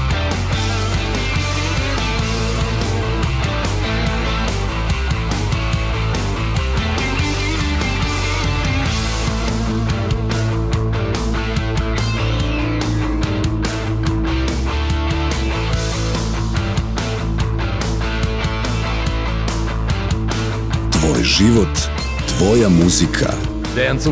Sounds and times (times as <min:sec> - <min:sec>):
Music: 0:00.0 - 0:24.1
Speech: 0:20.9 - 0:24.1.